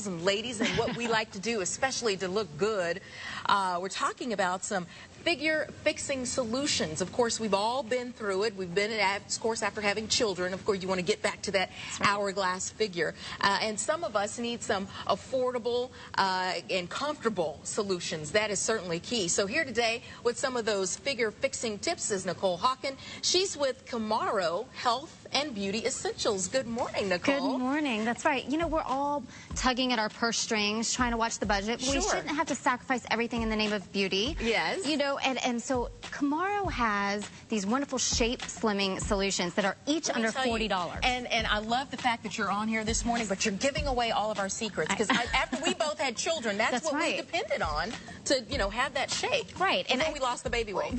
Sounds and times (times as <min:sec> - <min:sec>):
Speech: 0:31.4 - 0:32.6.